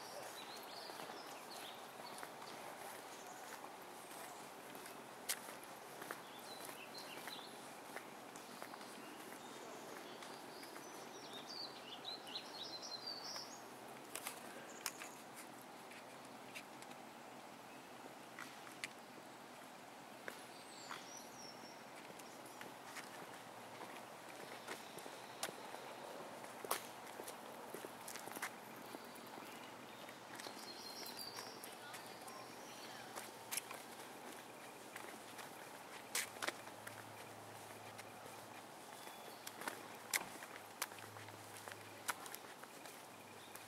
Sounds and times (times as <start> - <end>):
Outside, rural or natural: 0.0 - 43.6.